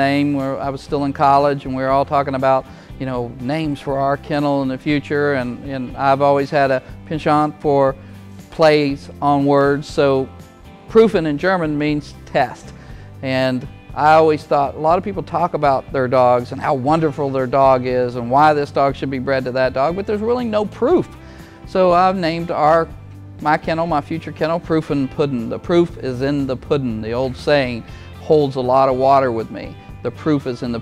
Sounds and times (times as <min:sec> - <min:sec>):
Speech: 0:00.0 - 0:08.0, 0:08.6 - 0:10.3, 0:10.9 - 0:21.1, 0:21.7 - 0:30.8
Music: 0:00.0 - 0:30.8.